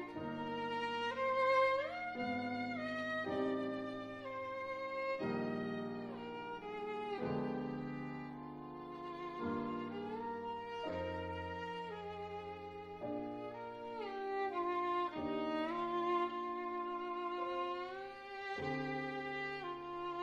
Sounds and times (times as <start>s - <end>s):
Violin, fiddle: 0.0s - 20.2s.